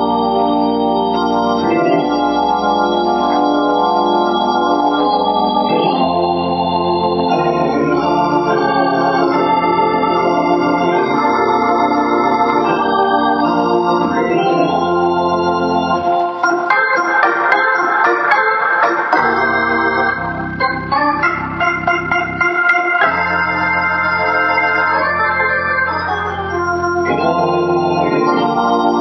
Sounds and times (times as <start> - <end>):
Electronic organ: 0.0 - 29.0
Hammond organ: 0.0 - 29.0.